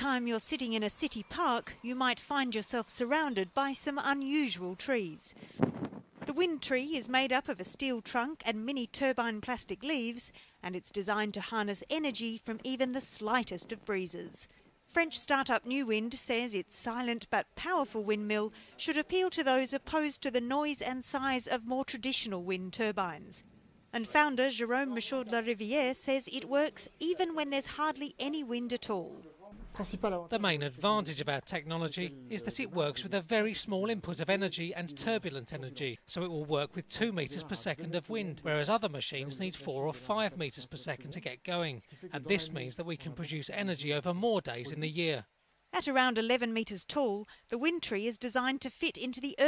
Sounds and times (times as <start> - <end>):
Speech: 0.0 - 5.3, 6.3 - 23.4, 24.0 - 49.4.